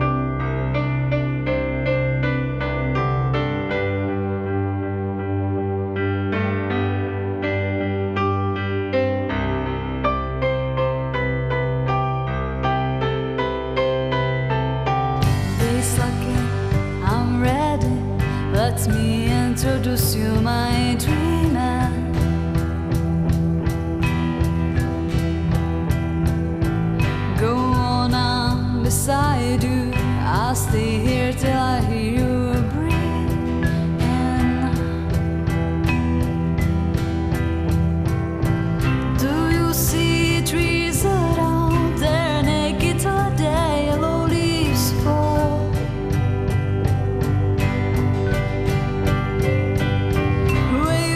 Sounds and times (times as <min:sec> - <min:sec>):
Music: 0:00.0 - 0:51.1.